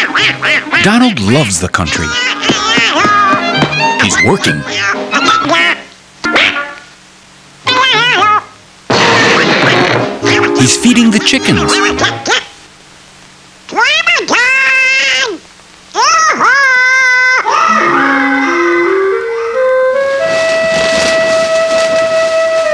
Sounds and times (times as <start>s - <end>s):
Screaming: 16.0s - 17.8s.